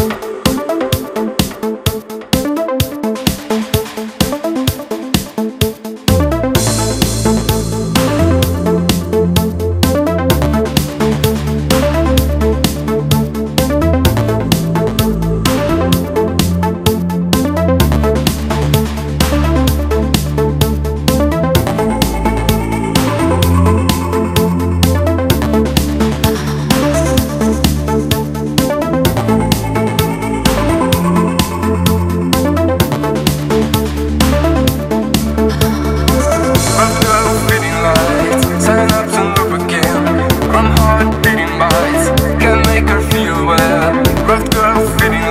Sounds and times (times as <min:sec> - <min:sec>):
House music: 0:00.0 - 0:45.3.